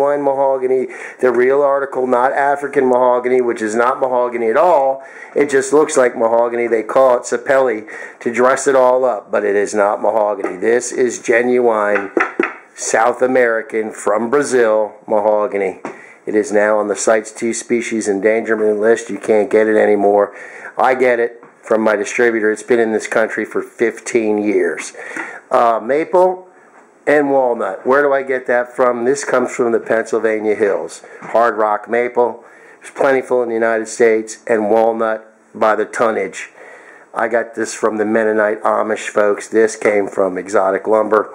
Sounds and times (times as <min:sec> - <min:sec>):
Speech: 0:00.0 - 0:12.2, 0:12.8 - 0:36.6, 0:37.2 - 0:41.3.